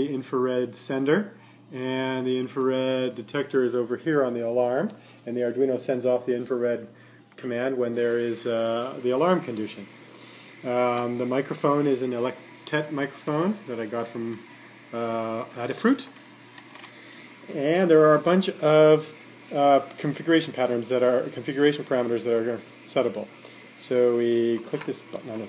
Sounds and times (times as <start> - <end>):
Speech: 0.0 - 9.9, 10.6 - 16.2, 17.5 - 25.4.